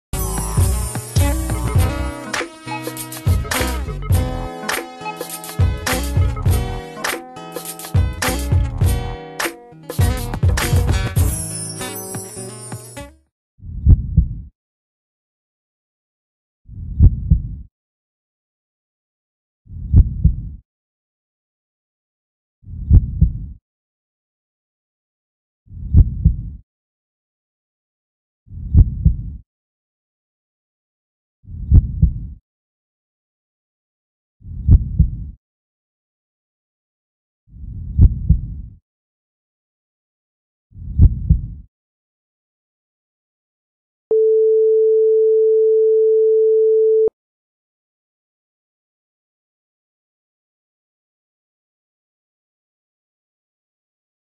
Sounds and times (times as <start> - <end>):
Heart sounds, heartbeat: 13.8 - 14.4, 16.9 - 17.6, 19.9 - 20.6, 22.8 - 23.6, 25.9 - 26.6, 28.7 - 29.4, 31.6 - 32.4, 34.6 - 35.3, 37.9 - 38.6, 40.9 - 41.6.